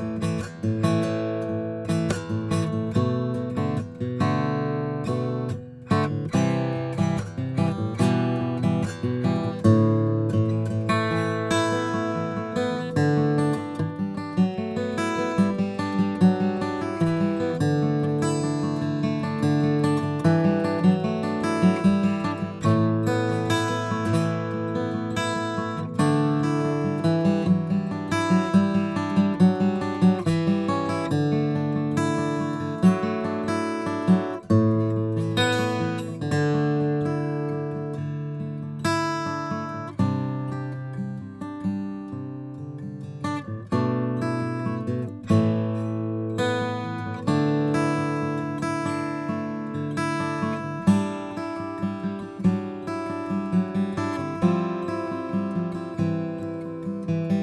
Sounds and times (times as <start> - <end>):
Music: 0.0 - 57.4.